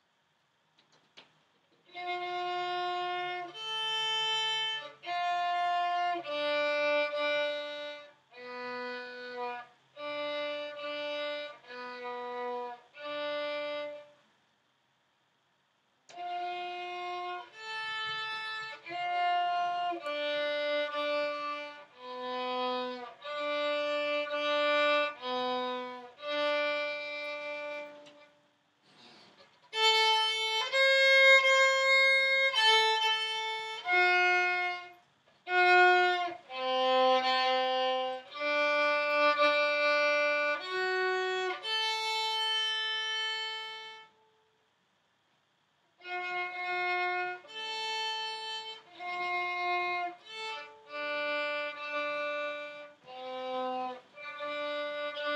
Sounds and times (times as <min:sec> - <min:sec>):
Violin, fiddle: 0:01.8 - 0:14.3, 0:16.1 - 0:44.4, 0:46.0 - 0:55.3.